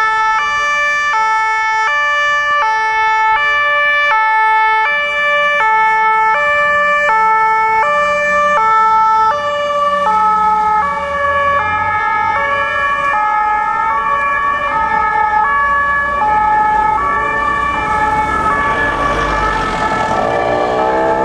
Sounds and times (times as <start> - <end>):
Ambulance (siren): 0.0 - 21.2.